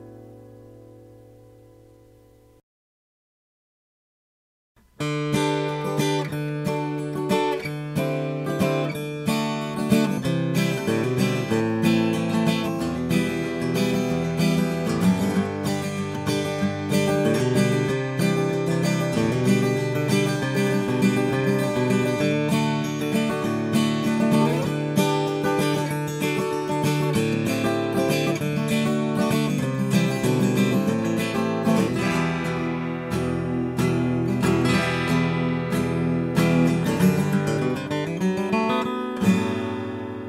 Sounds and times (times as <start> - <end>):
Strum: 4.8 - 40.2.